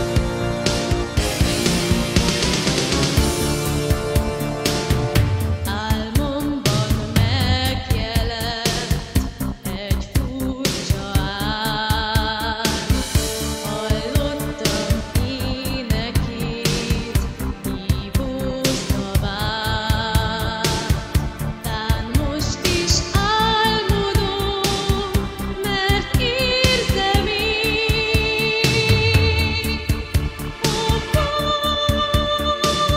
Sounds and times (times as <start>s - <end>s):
Music: 0.0s - 32.9s
Female singing: 5.7s - 13.0s, 13.6s - 21.0s, 21.7s - 30.0s, 30.7s - 32.9s.